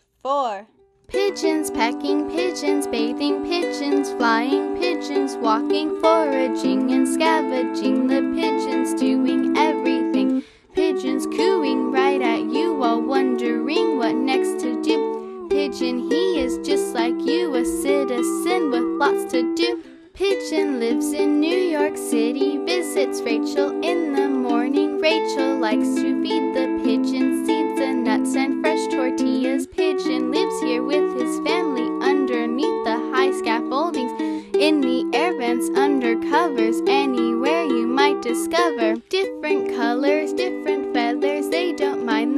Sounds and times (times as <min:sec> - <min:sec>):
Music: 0:00.8 - 0:42.3.